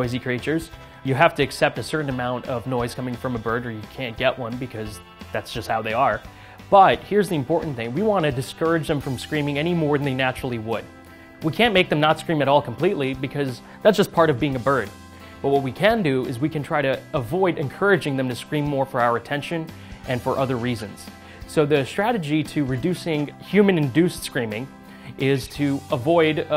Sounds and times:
Music: 0.0 - 26.5
Speech: 0.0 - 26.5.

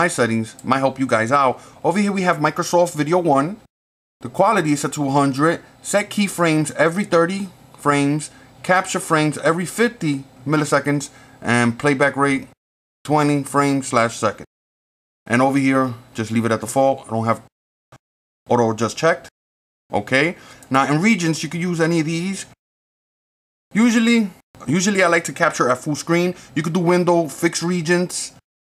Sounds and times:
Speech: 0.0 - 14.5, 15.3 - 17.5, 18.5 - 19.3, 19.9 - 22.6, 23.7 - 28.5.

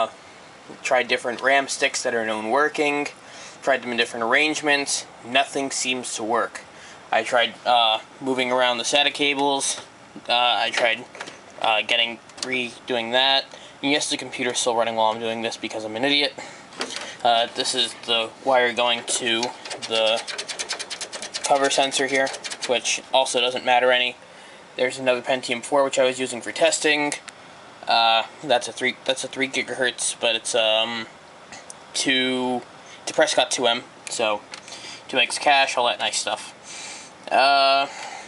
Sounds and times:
Speech: 0.0 - 16.4, 17.2 - 20.3, 21.4 - 24.2, 24.8 - 31.1, 32.0 - 34.5, 35.1 - 36.6, 37.3 - 38.0.

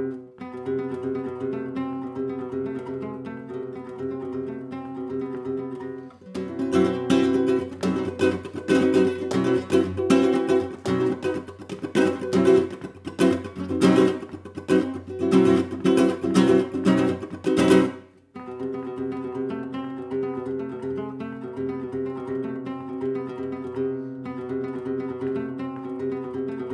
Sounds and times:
Guitar: 0.0 - 26.7.

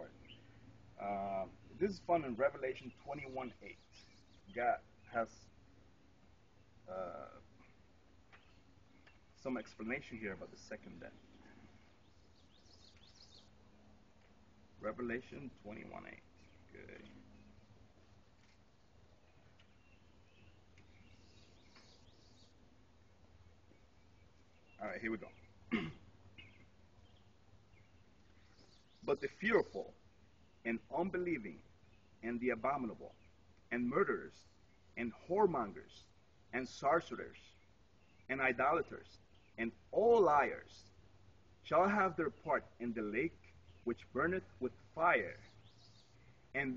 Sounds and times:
Outside, rural or natural: 0.0 - 46.7
Speech: 1.0 - 3.8, 4.5 - 5.4, 6.9 - 7.4, 9.4 - 11.2, 14.8 - 17.1, 24.8 - 25.4, 29.0 - 30.0, 30.7 - 31.6, 32.2 - 33.1, 33.7 - 34.4, 35.0 - 37.5, 38.3 - 40.8, 41.7 - 45.5, 46.6 - 46.7.

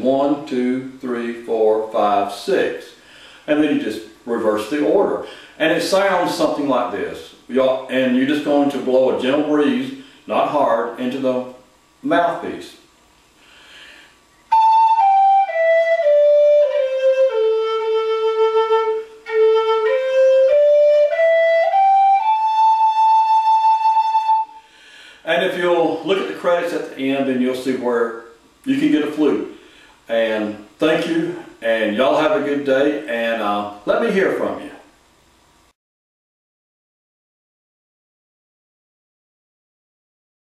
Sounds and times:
Flute: 14.5 - 24.7.

